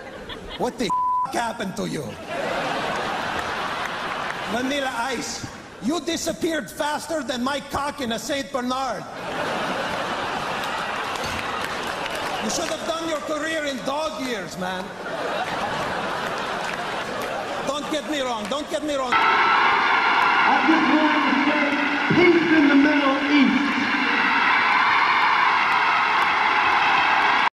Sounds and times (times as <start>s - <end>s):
Speech: 4.5s - 9.1s, 12.4s - 14.9s, 17.7s - 19.2s.